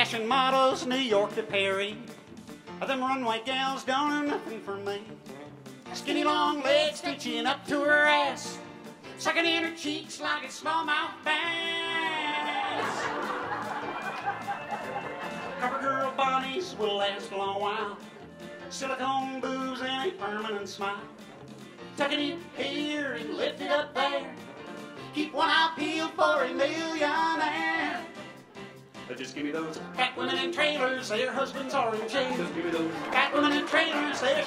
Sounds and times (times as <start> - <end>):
Inside, large room or hall: 0.0 - 34.4
Music: 0.0 - 34.4
Singing: 5.9 - 8.6, 15.4 - 21.1, 22.0 - 24.4, 25.2 - 28.2, 29.4 - 34.4.